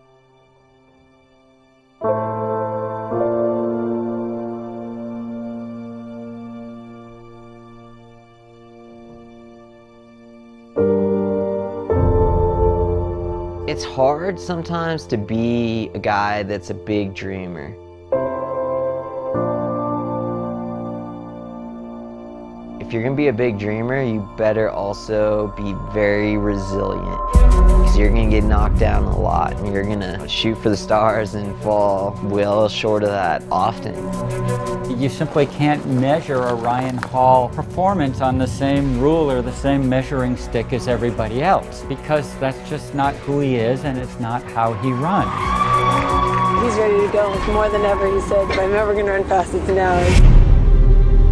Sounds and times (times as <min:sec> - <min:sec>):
Music: 0:00.0 - 0:51.3
Speech: 0:13.7 - 0:17.8, 0:22.8 - 0:27.3, 0:27.9 - 0:34.1, 0:34.9 - 0:45.3, 0:46.6 - 0:50.2.